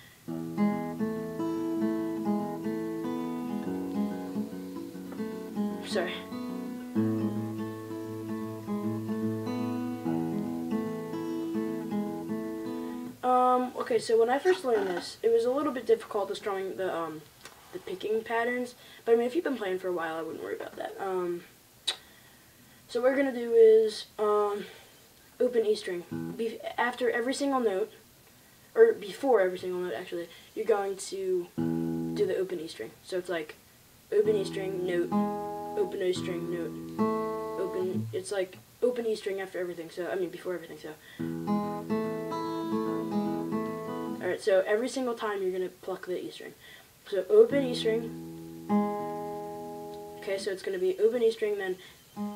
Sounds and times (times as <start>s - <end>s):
Acoustic guitar: 0.0s - 16.8s, 25.6s - 27.0s, 31.5s - 32.7s, 34.2s - 39.6s, 40.2s - 45.3s, 47.1s - 52.3s
Speech: 5.8s - 6.3s, 13.2s - 21.6s, 22.9s - 24.8s, 25.4s - 28.0s, 28.8s - 35.2s, 35.8s - 36.8s, 37.6s - 41.0s, 44.2s - 48.2s, 50.2s - 51.9s.